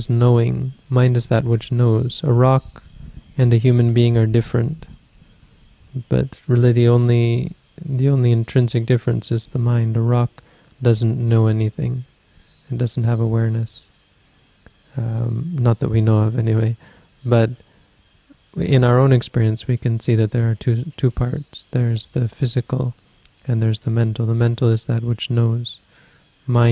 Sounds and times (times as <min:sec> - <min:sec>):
Speech: 0:00.0 - 0:02.8, 0:03.4 - 0:05.0, 0:06.0 - 0:12.1, 0:12.7 - 0:13.9, 0:15.0 - 0:17.6, 0:18.6 - 0:25.8, 0:26.5 - 0:26.7.